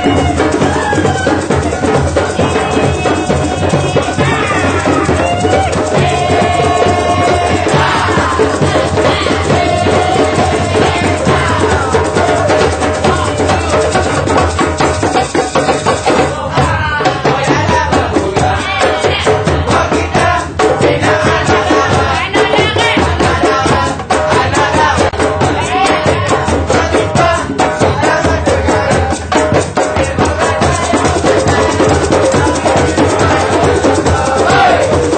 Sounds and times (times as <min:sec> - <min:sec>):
Percussion: 0:00.0 - 0:35.1.